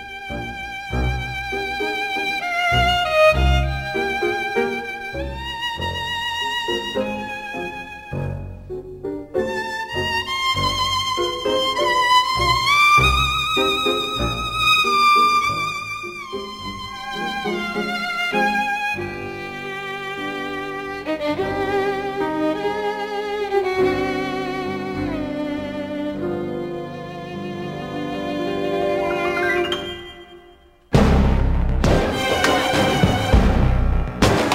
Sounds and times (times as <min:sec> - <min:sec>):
Sad music: 0:00.0 - 0:31.2.